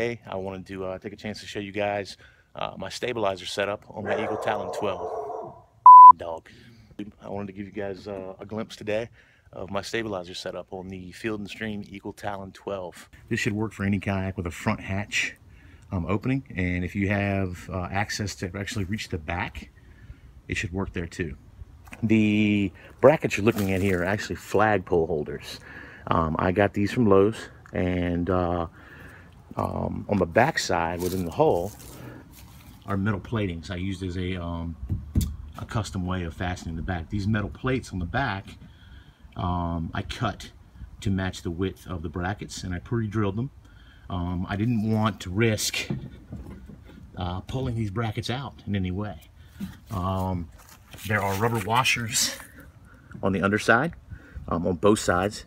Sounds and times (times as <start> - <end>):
Speech: 0.0 - 5.1, 6.1 - 19.7, 20.5 - 28.7, 29.5 - 31.8, 32.8 - 34.8, 35.6 - 38.6, 39.4 - 46.0, 47.2 - 49.3, 49.9 - 52.6, 53.2 - 55.4.